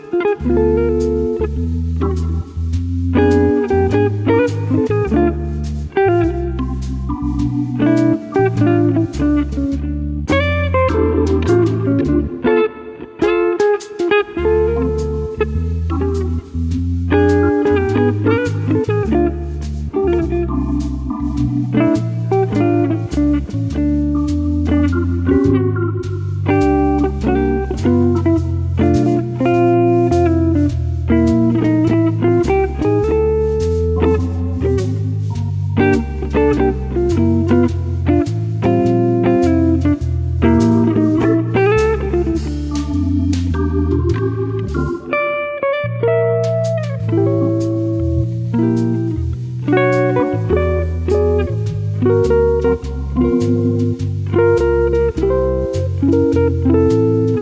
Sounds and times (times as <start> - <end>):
Acoustic guitar: 0.0 - 57.4
Bass guitar: 0.0 - 57.4
Electric guitar: 0.0 - 57.4
Strum: 0.0 - 57.4.